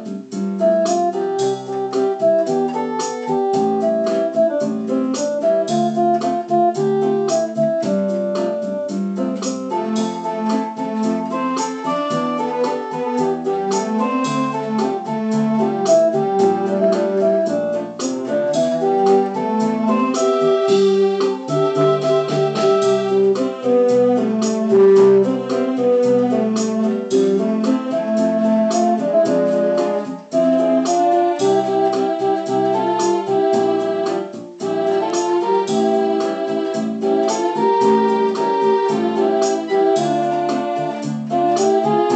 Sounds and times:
Music: 0.0s - 42.1s.

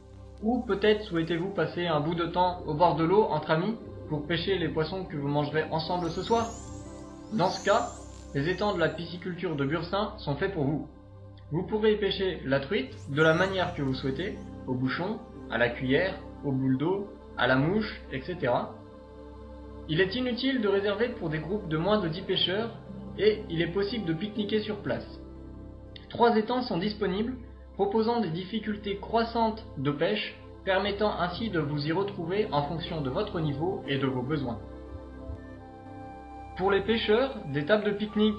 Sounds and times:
Music: 0.0s - 38.3s
Speech: 0.4s - 6.5s, 7.3s - 10.9s, 11.5s - 18.8s, 19.9s - 25.2s, 26.0s - 34.8s, 36.6s - 38.3s.

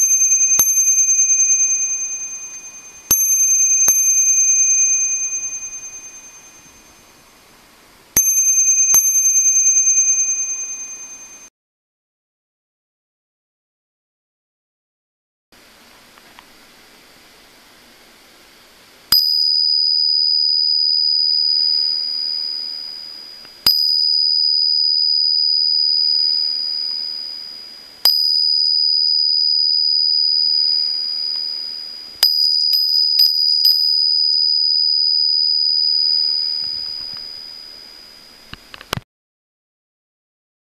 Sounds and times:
Bicycle bell: 0.0s - 7.4s, 8.2s - 11.5s, 19.1s - 38.8s.

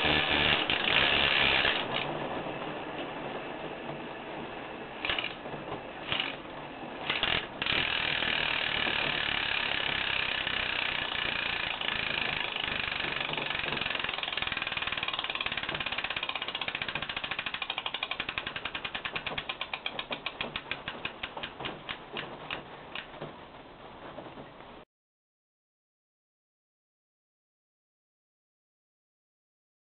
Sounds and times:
Bicycle: 0.0s - 3.0s, 5.0s - 24.8s.

